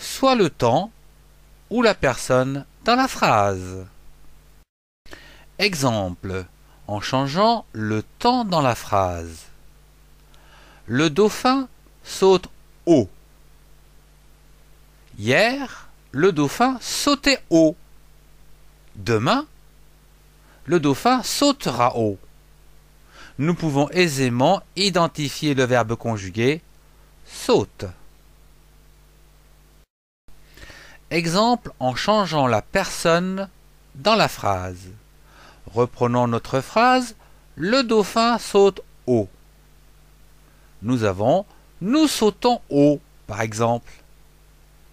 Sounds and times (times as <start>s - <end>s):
Speech: 0.0s - 1.0s, 1.7s - 4.0s, 5.6s - 9.6s, 10.9s - 13.2s, 15.1s - 17.8s, 18.9s - 19.5s, 20.7s - 22.2s, 23.4s - 26.6s, 27.2s - 28.0s, 31.1s - 35.0s, 35.6s - 39.4s, 40.8s - 44.0s.